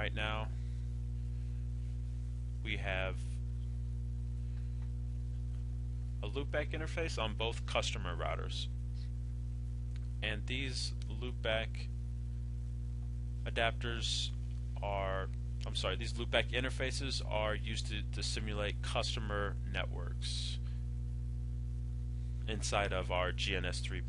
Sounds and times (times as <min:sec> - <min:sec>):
Speech: 0:00.0 - 0:00.5, 0:02.6 - 0:03.4, 0:06.2 - 0:08.7, 0:10.2 - 0:11.9, 0:13.5 - 0:20.7, 0:22.5 - 0:24.0.